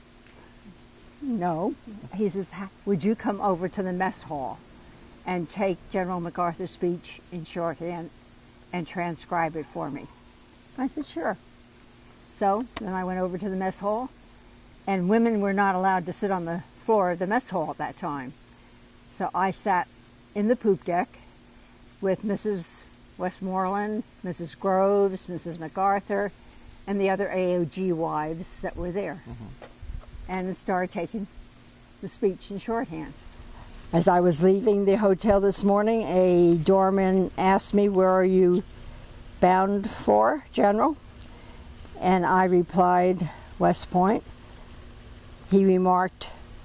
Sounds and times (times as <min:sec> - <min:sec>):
Narration, monologue: 0:00.0 - 0:46.6
Female speech, woman speaking: 0:01.2 - 0:04.6, 0:05.3 - 0:10.1, 0:10.8 - 0:11.4, 0:12.4 - 0:14.1, 0:14.9 - 0:18.4, 0:19.1 - 0:21.2, 0:22.0 - 0:26.3, 0:26.9 - 0:29.3, 0:30.3 - 0:31.3, 0:32.0 - 0:33.2, 0:33.9 - 0:38.7, 0:39.4 - 0:41.0, 0:42.0 - 0:44.2, 0:45.5 - 0:46.4.